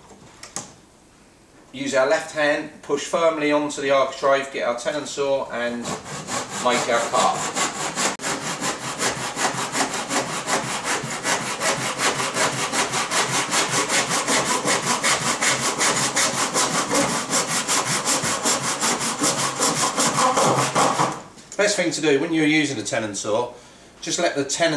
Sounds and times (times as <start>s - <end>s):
Speech: 1.8s - 6.0s, 6.6s - 7.5s, 21.6s - 24.7s
Wood: 5.8s - 21.3s.